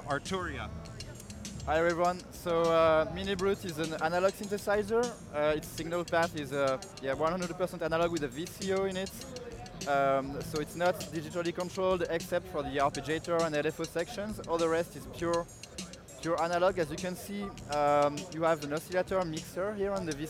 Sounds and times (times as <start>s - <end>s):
Speech: 0.0s - 0.7s, 1.7s - 15.5s, 16.2s - 20.3s
Music: 0.0s - 20.3s.